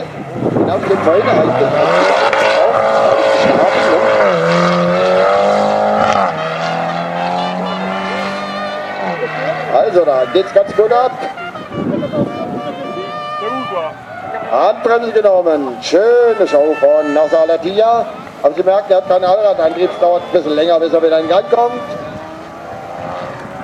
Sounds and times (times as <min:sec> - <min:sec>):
Speech: 0:00.7 - 0:02.2, 0:12.2 - 0:22.0.